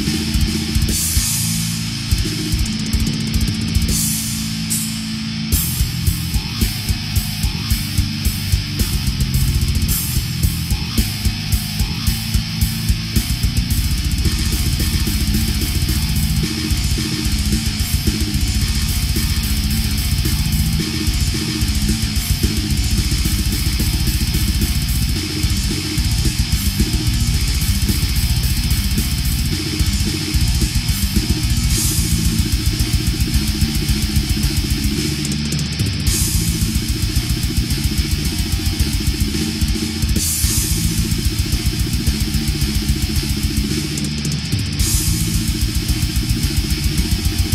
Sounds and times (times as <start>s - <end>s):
Music: 0.0s - 47.5s.